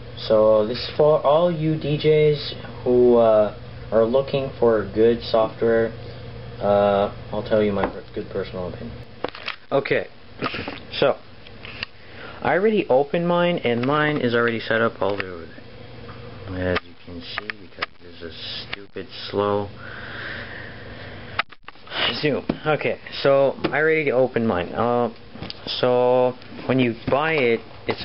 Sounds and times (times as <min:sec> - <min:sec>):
Speech: 0:00.2 - 0:06.0, 0:06.6 - 0:09.0, 0:09.7 - 0:10.1, 0:10.9 - 0:11.2, 0:12.4 - 0:15.6, 0:16.4 - 0:19.7, 0:22.0 - 0:28.0.